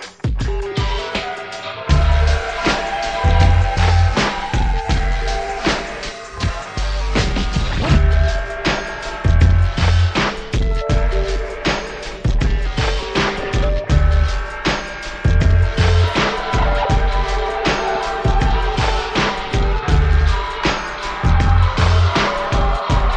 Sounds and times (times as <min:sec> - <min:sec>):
Music: 0:00.0 - 0:23.1.